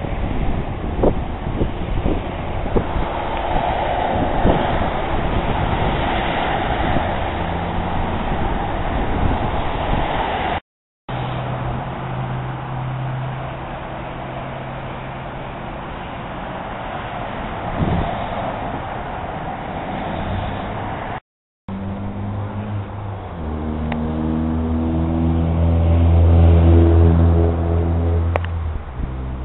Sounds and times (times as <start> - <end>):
Wind noise (microphone): 0.0 - 10.6, 17.5 - 21.0, 28.7 - 29.4
Rustling leaves: 0.0 - 21.2.